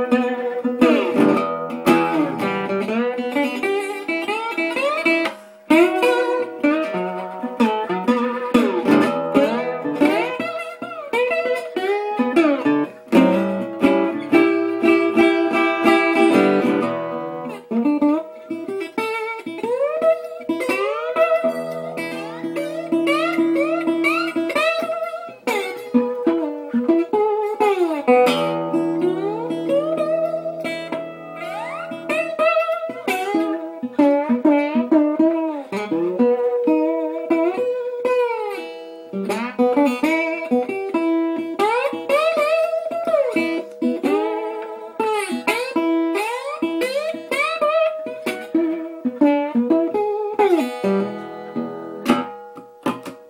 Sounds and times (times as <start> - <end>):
Acoustic guitar: 0.0 - 53.3.